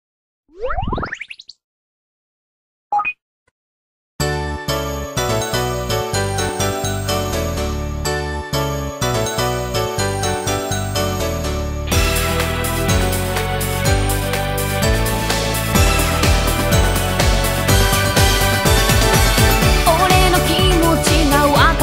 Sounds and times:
Music: 0:04.2 - 0:21.8.

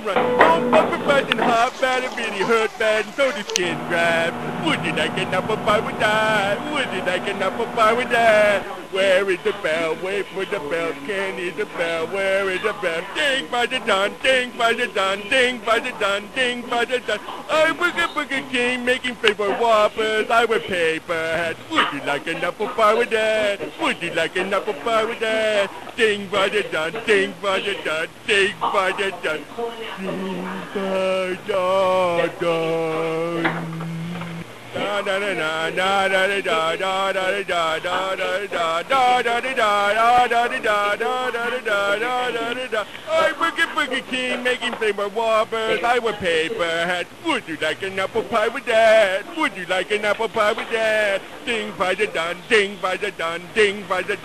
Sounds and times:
Speech: 0:00.0 - 0:54.2.

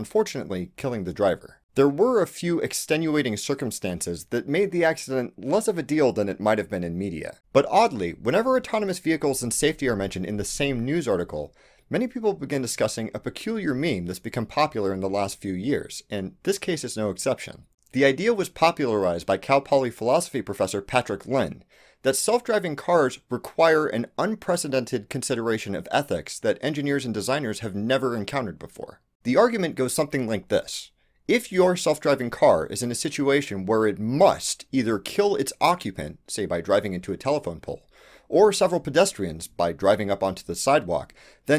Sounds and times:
Speech: 0:00.0 - 0:41.5.

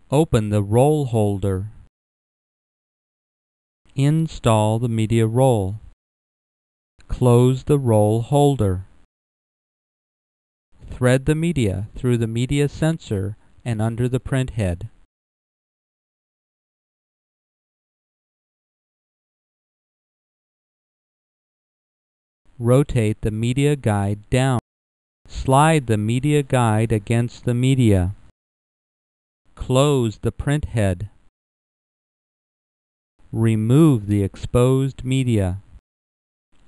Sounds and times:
Speech: 0:00.0 - 0:01.8, 0:04.0 - 0:05.9, 0:07.0 - 0:08.9, 0:10.8 - 0:15.0, 0:22.6 - 0:24.7, 0:25.3 - 0:28.2, 0:29.6 - 0:31.2, 0:33.3 - 0:35.7.

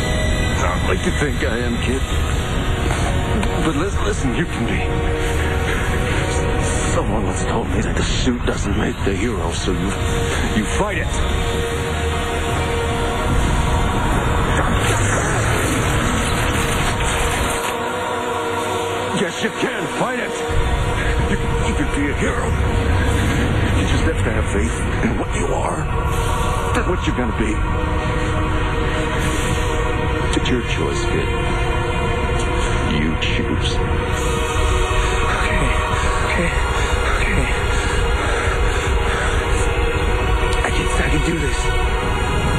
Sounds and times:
Music: 0:00.0 - 0:42.5
Speech: 0:40.6 - 0:41.7.

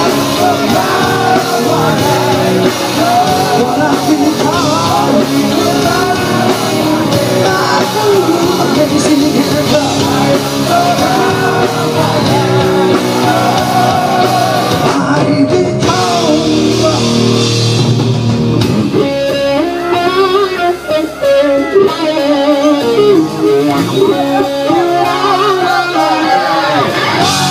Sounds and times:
Rock music: 0:00.0 - 0:27.5.

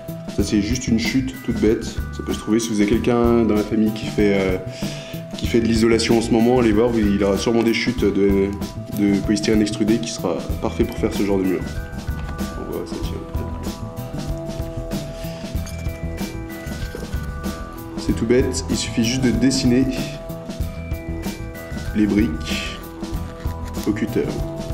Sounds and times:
Music: 0:00.0 - 0:24.7
Speech: 0:00.4 - 0:04.6, 0:05.4 - 0:11.7, 0:12.6 - 0:13.4, 0:18.0 - 0:20.2, 0:22.0 - 0:22.8, 0:23.8 - 0:24.5.

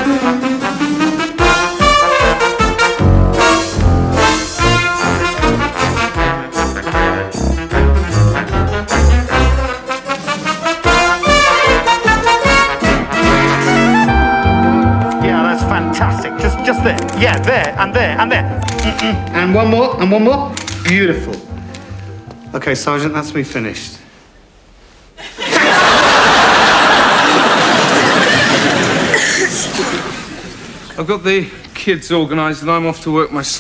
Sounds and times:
Trombone: 0:00.0 - 0:17.9
Trumpet: 0:00.0 - 0:19.8.

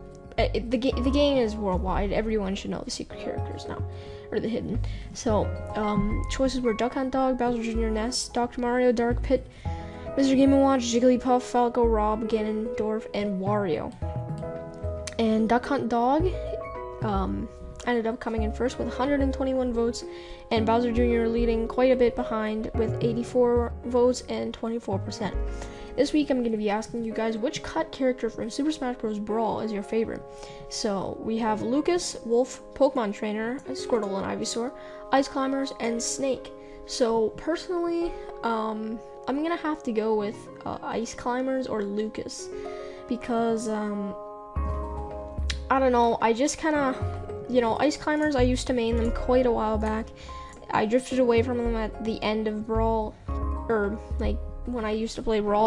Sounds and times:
Music: 0:00.0 - 0:55.6
Speech: 0:00.3 - 0:09.5, 0:10.2 - 0:14.0, 0:15.1 - 0:42.5, 0:43.1 - 0:44.2, 0:45.5 - 0:50.1, 0:50.7 - 0:55.6.

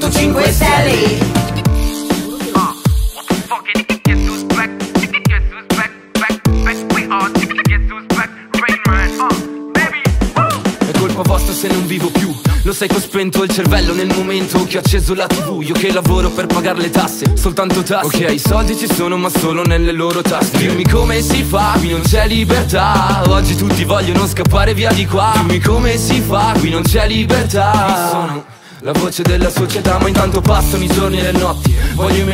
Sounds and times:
Music: 0:00.0 - 0:32.3.

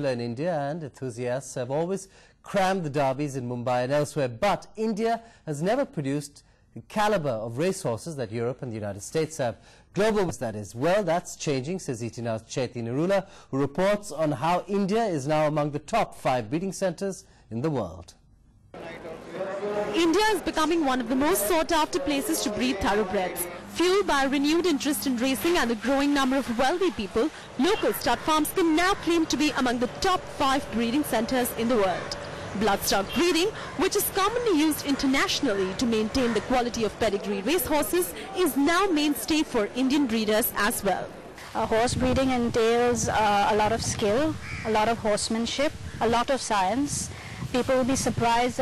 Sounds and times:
Speech: 0:18.8 - 0:48.6.

